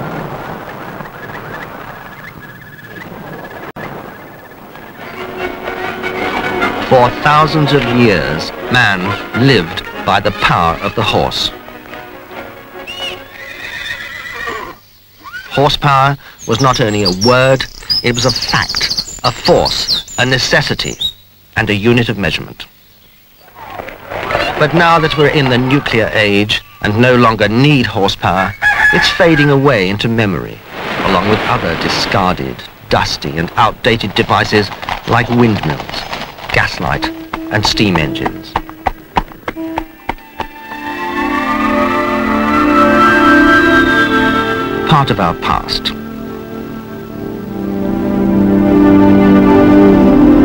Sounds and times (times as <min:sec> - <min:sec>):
Music: 0:04.8 - 0:14.0, 0:36.6 - 0:50.4
Speech: 0:06.8 - 0:11.6, 0:15.5 - 0:21.0, 0:21.6 - 0:22.7, 0:24.4 - 0:38.6, 0:44.9 - 0:46.0
Neigh, whinny: 0:12.9 - 0:15.6, 0:24.7 - 0:27.0, 0:28.5 - 0:29.6.